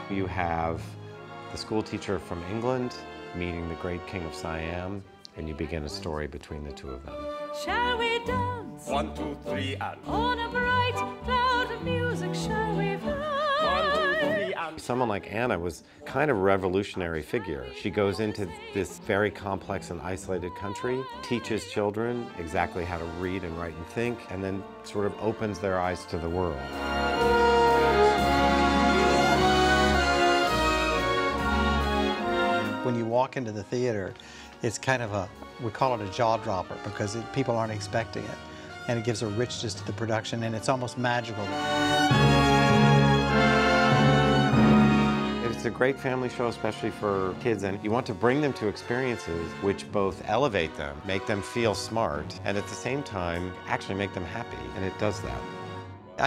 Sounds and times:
Music: 0.0 - 56.2
Speech: 1.6 - 7.2, 8.8 - 10.1, 13.6 - 26.6, 32.8 - 41.5, 45.4 - 55.4.

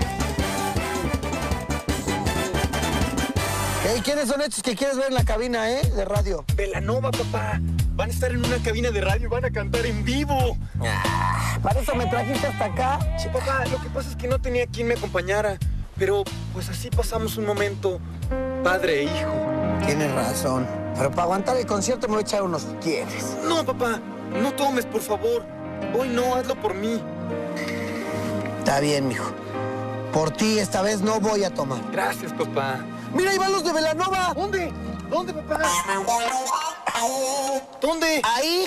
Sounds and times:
Music: 0.0 - 38.6.

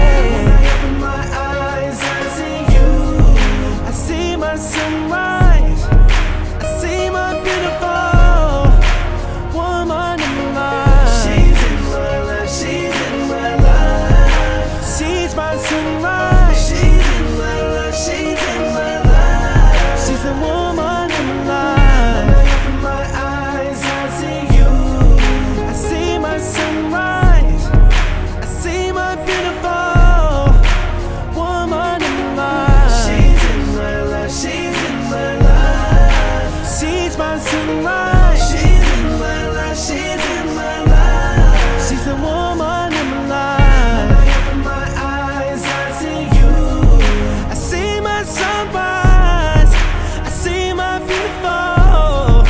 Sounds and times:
Hip hop music: 0.0 - 52.4.

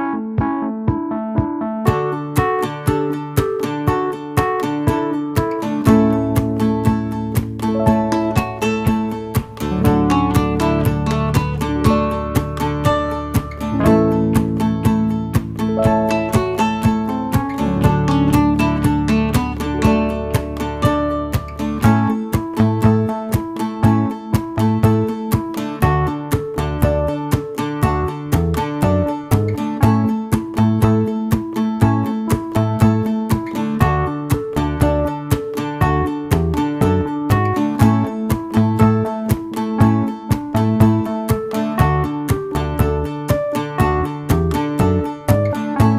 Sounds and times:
Music: 0.0 - 45.9.

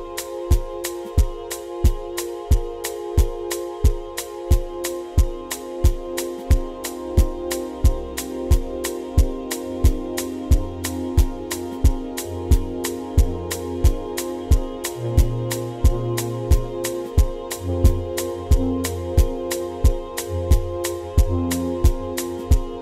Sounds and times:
Music: 0.0 - 22.8.

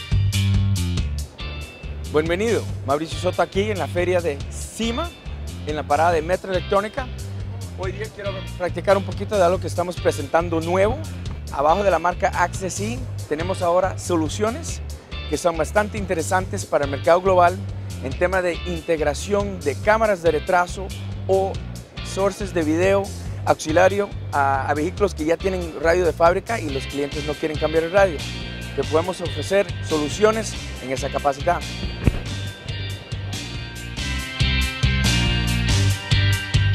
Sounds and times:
Music: 0.0 - 36.7
Speech: 2.1 - 7.1, 7.8 - 28.2, 28.8 - 31.7.

